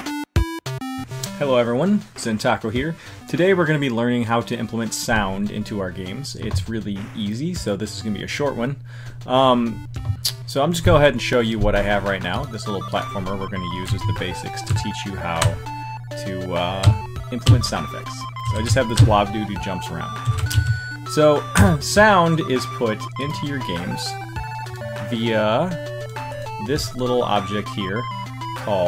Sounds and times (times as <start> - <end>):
Funny music: 0.0 - 28.8
Video game music: 0.0 - 28.8
Speech: 1.4 - 9.8, 10.5 - 15.6, 16.2 - 20.2, 21.1 - 24.2, 25.0 - 25.8, 26.6 - 28.0, 28.6 - 28.8.